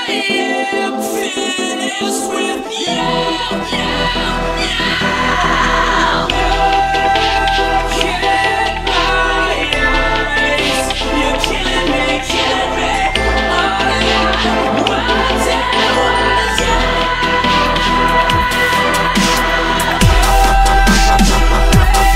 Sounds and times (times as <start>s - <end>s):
Electronic music: 0.0s - 22.1s.